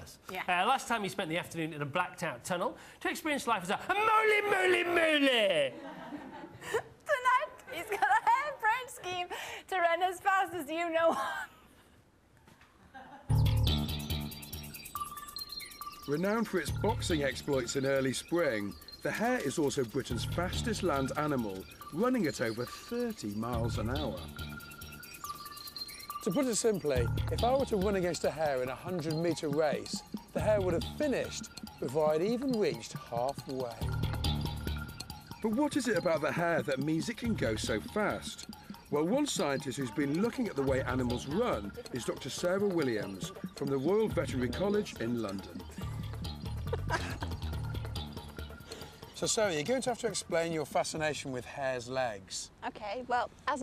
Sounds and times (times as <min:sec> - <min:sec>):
Music: 0:13.3 - 0:50.9.